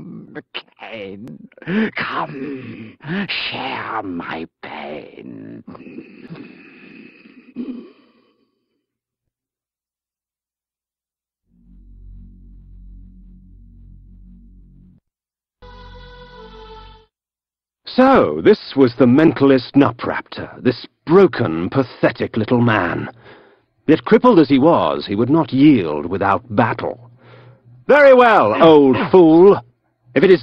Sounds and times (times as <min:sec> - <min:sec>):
Speech: 0:00.0 - 0:05.8, 0:17.9 - 0:23.2, 0:23.9 - 0:27.1, 0:27.9 - 0:30.4.